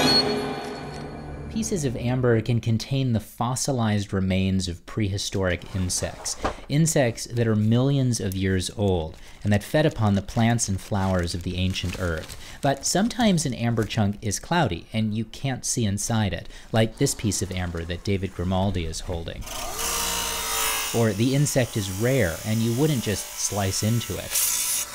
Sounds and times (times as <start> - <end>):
Speech: 1.5 - 19.5, 20.9 - 24.4.